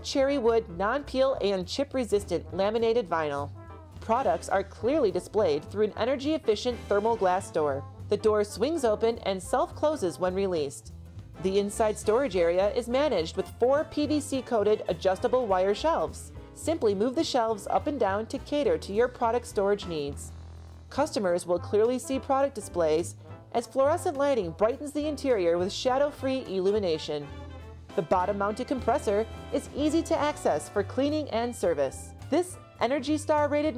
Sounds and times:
Speech: 0:00.0 - 0:20.3, 0:21.0 - 0:27.2, 0:28.0 - 0:33.7
Music: 0:00.0 - 0:33.7.

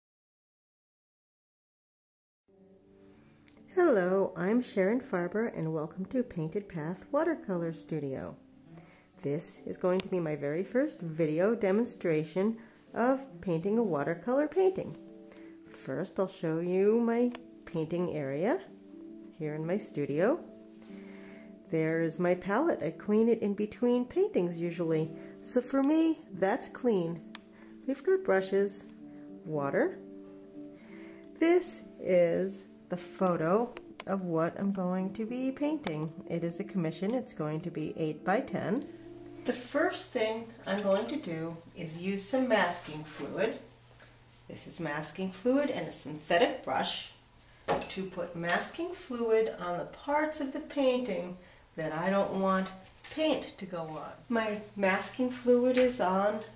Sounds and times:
Music: 0:02.5 - 0:56.5
Speech: 0:03.8 - 0:08.4, 0:09.2 - 0:15.0, 0:15.8 - 0:18.7, 0:19.4 - 0:20.5, 0:21.7 - 0:27.2, 0:27.9 - 0:28.9, 0:29.5 - 0:30.0, 0:31.4 - 0:38.9, 0:39.5 - 0:43.7, 0:44.5 - 0:47.2, 0:47.9 - 0:56.5.

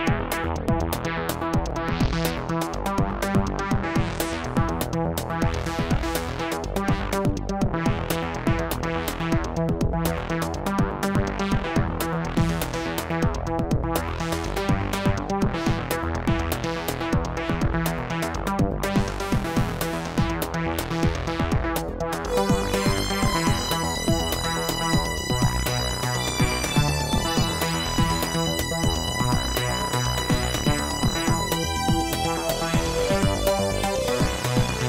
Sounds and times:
Techno: 0:00.0 - 0:34.8.

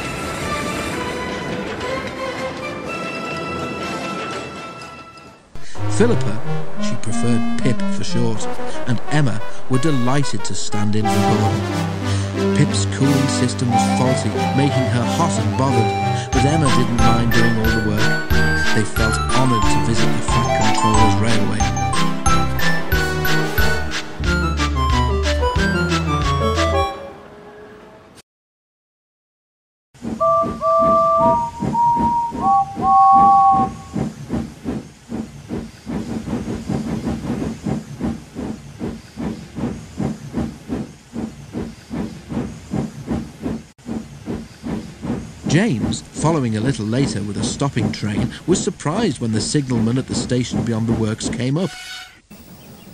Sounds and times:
Music: 0:00.0 - 0:27.2, 0:30.2 - 0:33.8
Speech: 0:05.8 - 0:11.6, 0:12.5 - 0:21.8, 0:45.5 - 0:51.8.

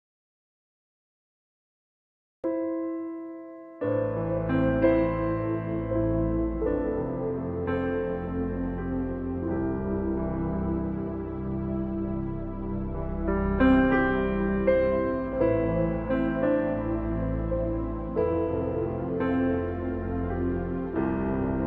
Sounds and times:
Music: 0:02.5 - 0:21.6.

